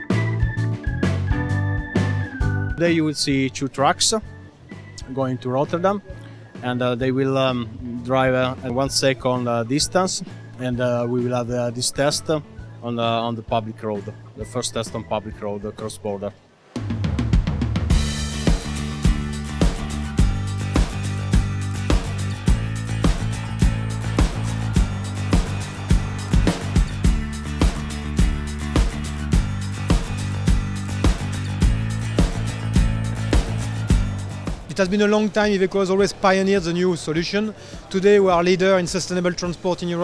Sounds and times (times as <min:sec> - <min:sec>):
Music: 0:00.0 - 0:40.0
Speech: 0:02.8 - 0:04.3, 0:05.0 - 0:16.4, 0:34.7 - 0:40.0.